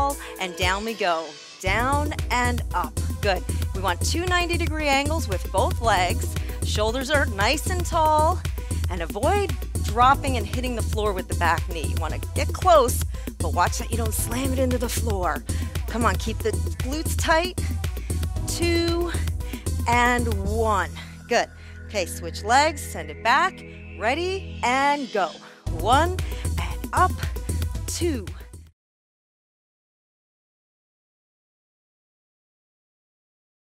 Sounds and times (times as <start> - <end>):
Speech: 0.0 - 17.6, 18.5 - 19.2, 19.8 - 27.3, 27.9 - 28.4
Music: 0.0 - 28.8.